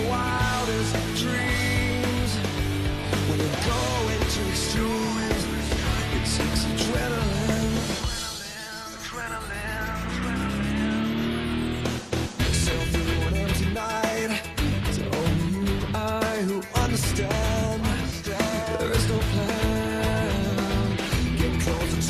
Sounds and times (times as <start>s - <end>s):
Music: 0.0s - 22.0s.